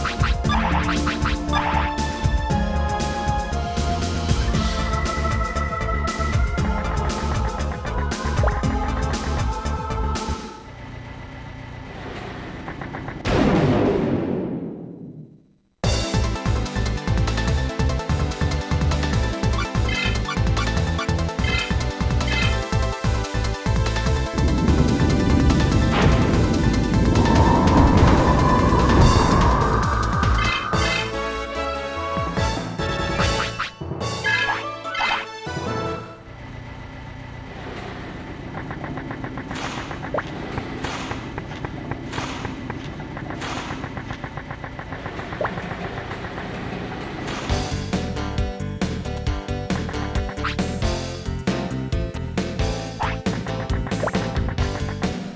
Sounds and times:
Music: 0.0s - 10.8s, 15.8s - 36.4s, 45.4s - 55.3s.

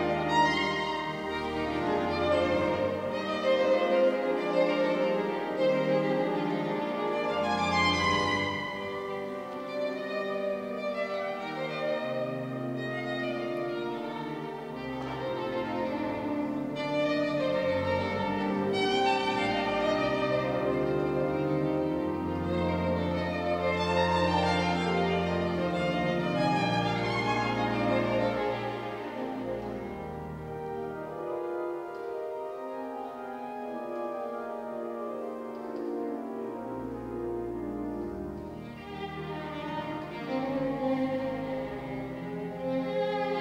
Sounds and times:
Violin, fiddle: 0.0s - 43.4s.

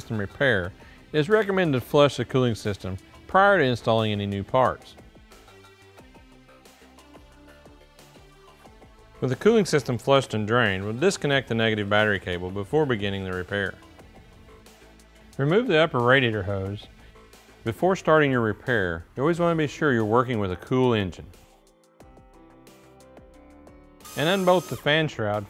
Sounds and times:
Speech: 0.0s - 5.0s, 9.2s - 13.8s, 15.4s - 16.9s, 17.6s - 21.3s, 24.2s - 25.5s
Music: 0.0s - 25.5s.

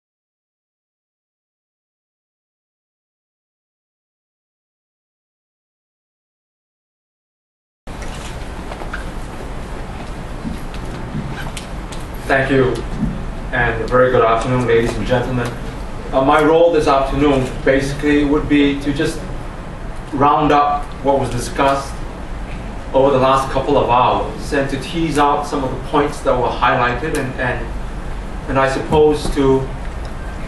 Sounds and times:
Narration, monologue: 10.4s - 30.4s
Male speech, man speaking: 12.3s - 12.9s, 13.5s - 19.2s, 20.2s - 22.0s, 23.0s - 27.7s, 28.5s - 29.7s.

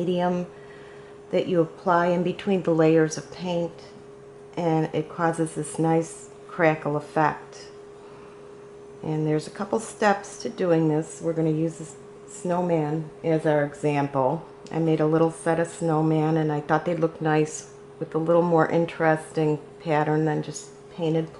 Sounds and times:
Speech: 0.0s - 0.5s, 1.3s - 4.0s, 4.6s - 7.7s, 9.0s - 21.4s.

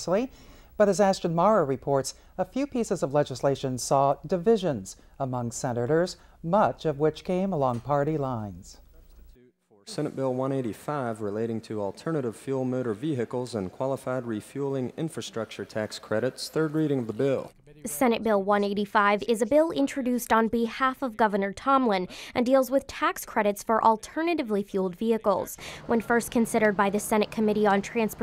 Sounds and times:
Speech: 0.0s - 28.2s.

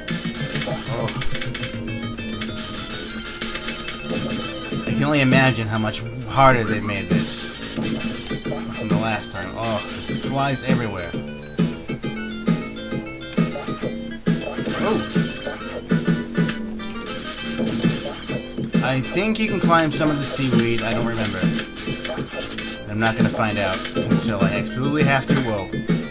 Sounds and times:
Music: 0.0s - 26.1s
Speech: 4.9s - 7.5s, 8.8s - 11.1s, 18.8s - 21.5s, 22.9s - 25.7s.

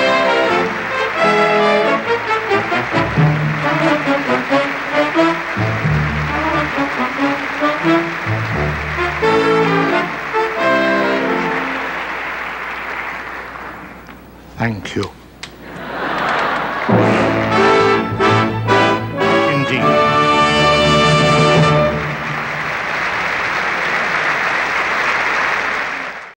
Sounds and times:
Music: 0.0s - 13.2s, 16.8s - 23.5s
Male speech, man speaking: 14.5s - 15.2s, 19.4s - 20.1s.

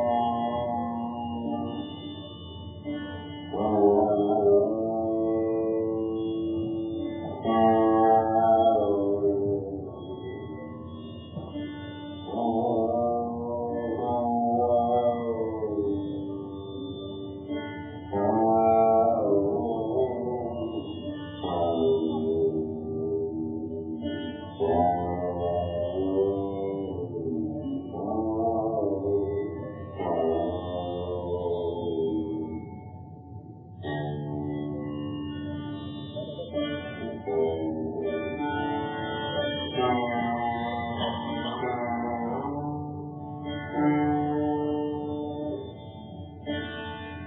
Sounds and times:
Sitar: 0.0s - 47.2s.

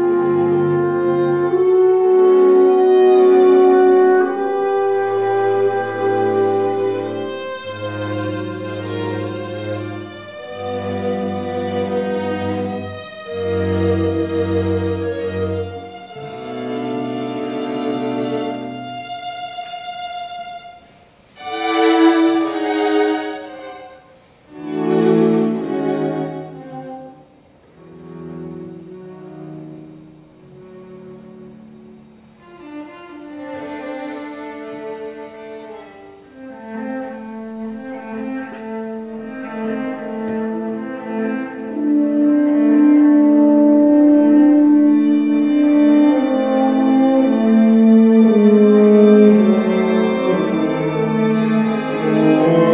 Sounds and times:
Violin, fiddle: 0.0s - 41.8s, 42.7s - 52.7s
Cello: 0.0s - 52.7s.

